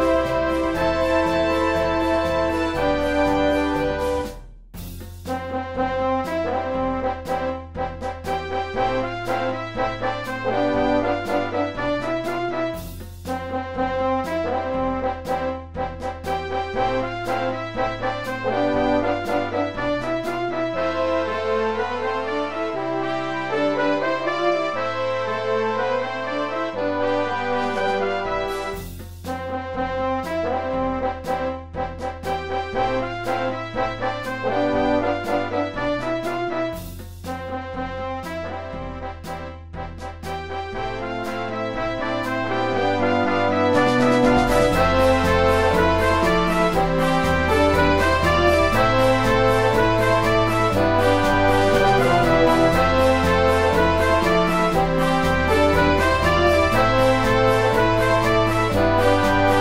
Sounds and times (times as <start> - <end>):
Music: 0.0 - 59.6.